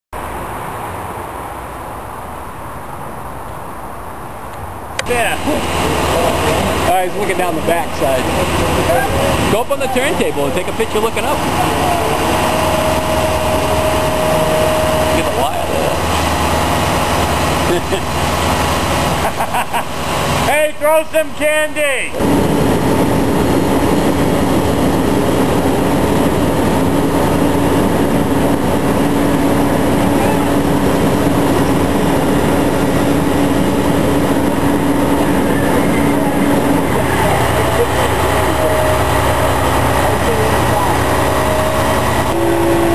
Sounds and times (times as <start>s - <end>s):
Truck: 0.2s - 42.9s
Speech: 5.1s - 12.1s, 20.5s - 22.2s.